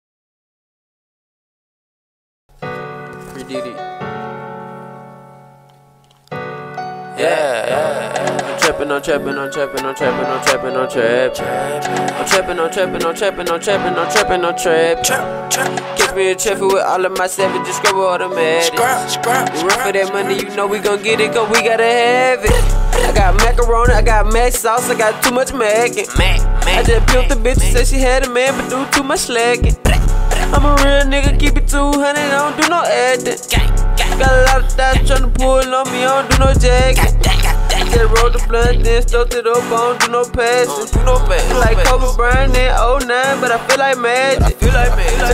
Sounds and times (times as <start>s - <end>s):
Jazz: 15.0s - 45.3s.